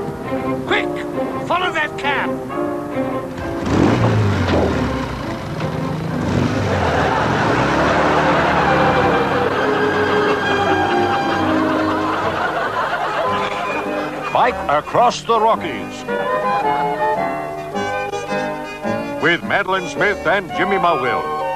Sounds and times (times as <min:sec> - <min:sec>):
Music: 0:00.0 - 0:21.5.